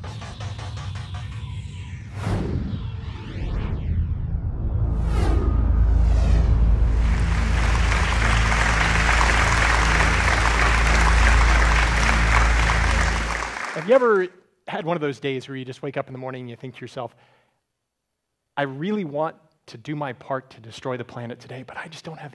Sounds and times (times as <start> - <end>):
Applause: 6.9 - 14.3
Speech: 13.8 - 17.2, 18.6 - 22.3.